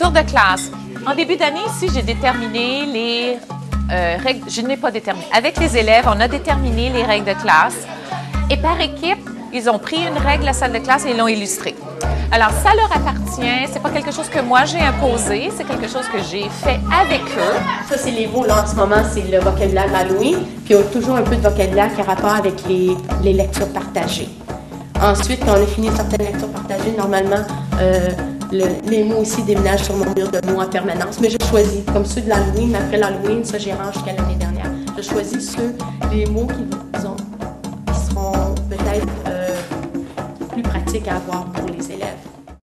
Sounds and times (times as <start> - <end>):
Music: 0.0 - 42.6.